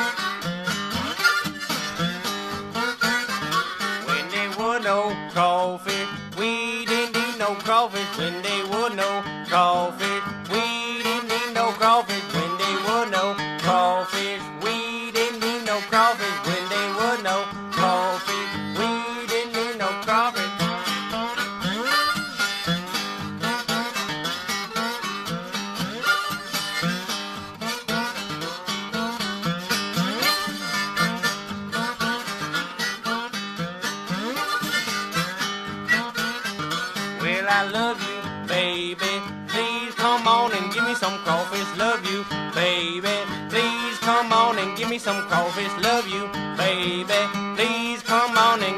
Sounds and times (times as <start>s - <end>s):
Music: 0.0s - 48.7s.